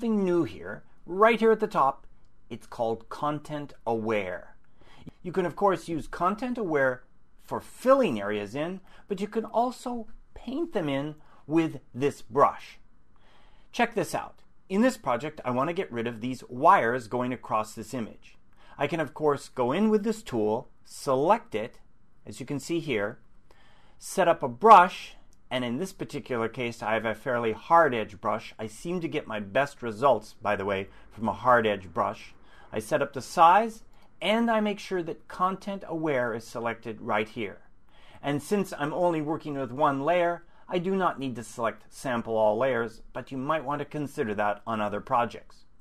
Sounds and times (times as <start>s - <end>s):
Speech: 0.0s - 12.8s, 13.7s - 23.2s, 24.0s - 45.7s.